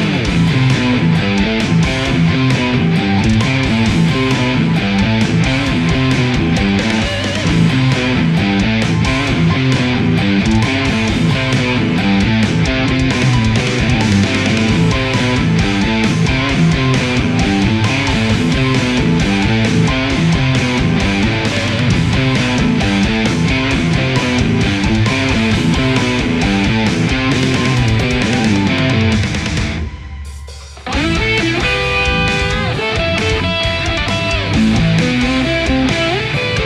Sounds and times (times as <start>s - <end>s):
Electric guitar: 0.0s - 36.6s.